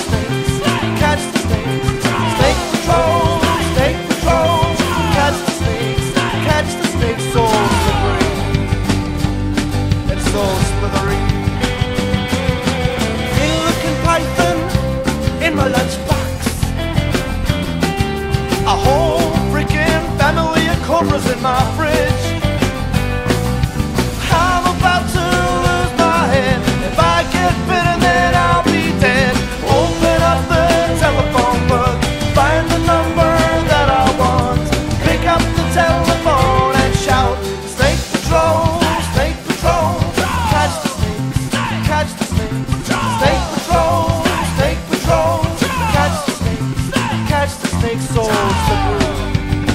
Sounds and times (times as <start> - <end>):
Music: 0.0 - 49.7.